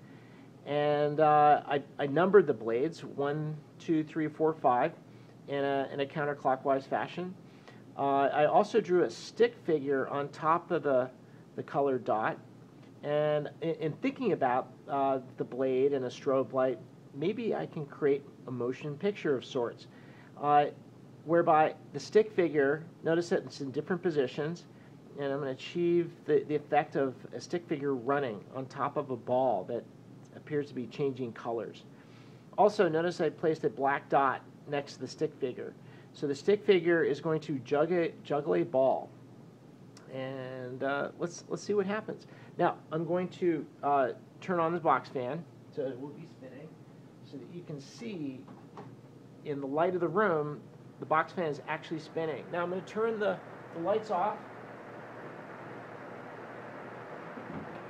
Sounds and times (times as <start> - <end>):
Speech: 0.6 - 7.4, 8.0 - 12.4, 13.0 - 31.9, 32.6 - 39.2, 40.0 - 48.6, 49.4 - 54.5.